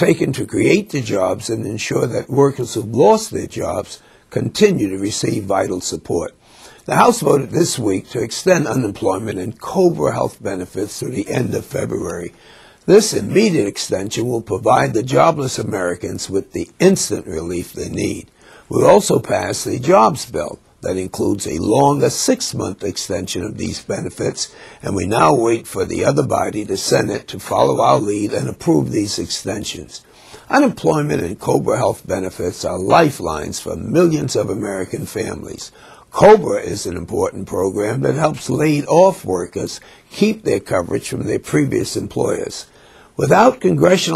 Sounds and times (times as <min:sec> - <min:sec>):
Speech: 0:00.0 - 0:44.1.